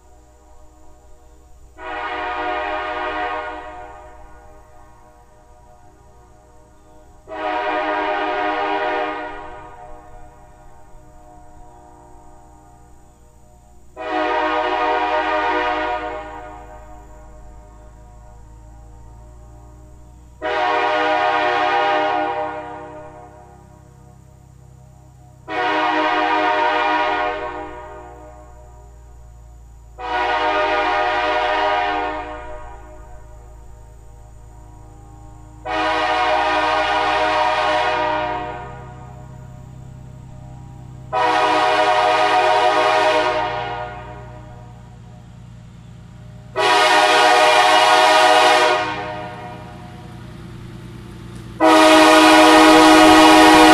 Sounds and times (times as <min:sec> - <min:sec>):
Vehicle horn, car horn, honking: 0:01.8 - 0:05.8, 0:06.4 - 0:12.3, 0:14.0 - 0:24.6, 0:25.4 - 0:34.6, 0:35.4 - 0:39.7, 0:40.8 - 0:44.7, 0:46.6 - 0:50.2, 0:51.6 - 0:53.7.